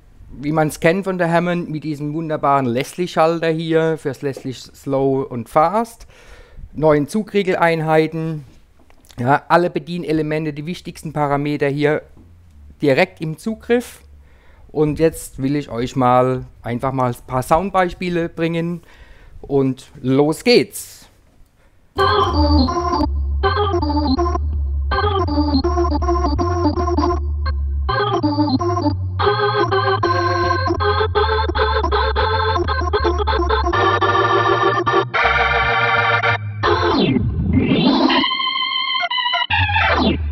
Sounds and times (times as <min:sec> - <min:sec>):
Speech: 0:00.4 - 0:06.1, 0:06.8 - 0:08.5, 0:09.1 - 0:12.1, 0:12.8 - 0:14.1, 0:14.7 - 0:18.8, 0:19.4 - 0:21.2.